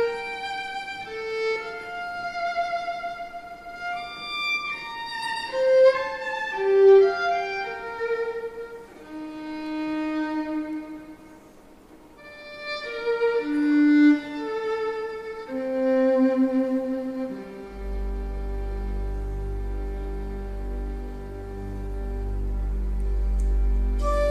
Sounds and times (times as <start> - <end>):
Cello: 0.0 - 24.3
Violin, fiddle: 0.0 - 24.3.